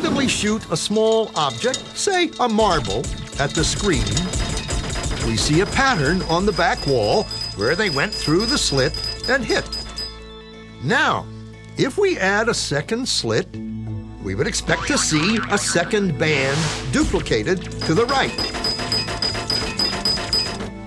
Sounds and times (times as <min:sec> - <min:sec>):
Speech: 0:00.0 - 0:04.3, 0:11.8 - 0:13.5, 0:14.2 - 0:18.4
Music: 0:00.0 - 0:20.8.